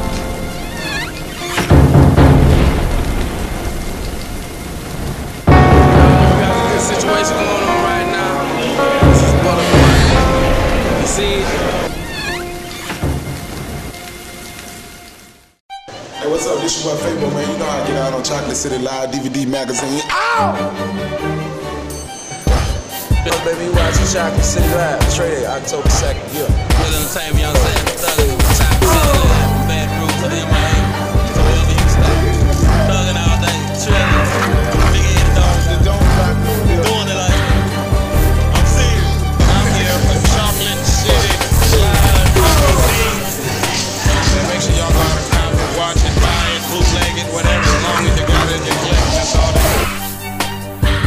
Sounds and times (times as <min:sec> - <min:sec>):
Music: 0:00.0 - 0:04.4, 0:05.4 - 0:51.0
Speech: 0:11.0 - 0:11.9, 0:16.2 - 0:20.6, 0:23.3 - 0:30.6, 0:39.4 - 0:43.3.